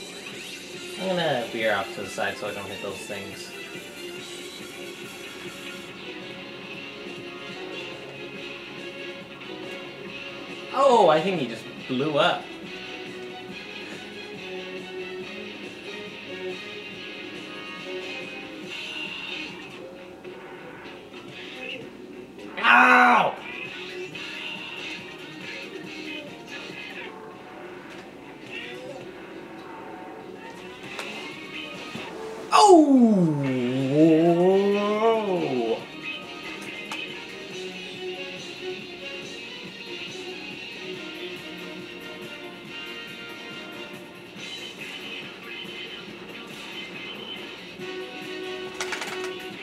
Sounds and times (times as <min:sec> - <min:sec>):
Television: 0:00.0 - 0:49.6.